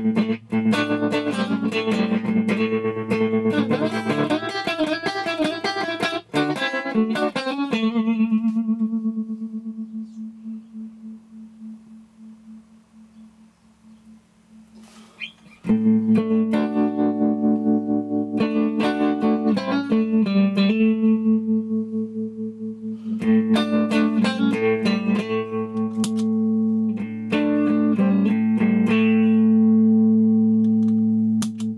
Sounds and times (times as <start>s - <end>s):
Effects unit: 0.0s - 31.7s
Guitar: 0.0s - 31.7s.